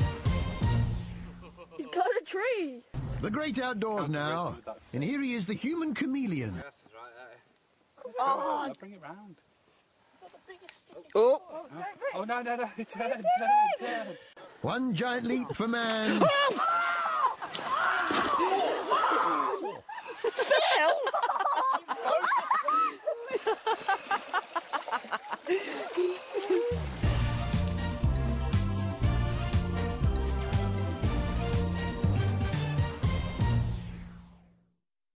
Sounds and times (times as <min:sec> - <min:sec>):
Music: 0:00.0 - 0:01.6, 0:26.8 - 0:34.7
Gurgling: 0:25.5 - 0:27.7.